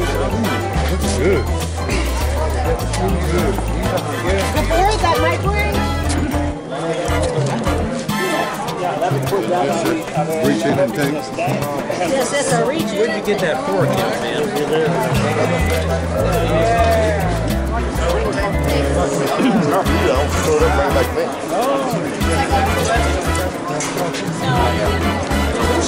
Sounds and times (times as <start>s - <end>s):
Music: 0.0s - 25.8s
Speech: 6.6s - 25.8s.